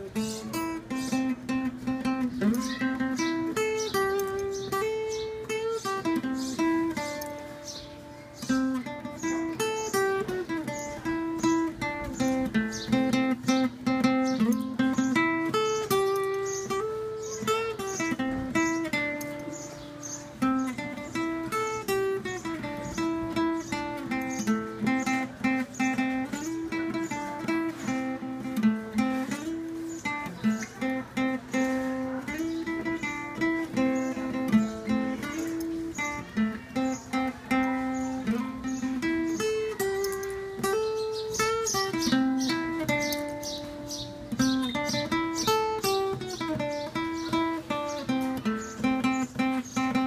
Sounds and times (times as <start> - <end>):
Acoustic guitar: 0.0 - 50.0.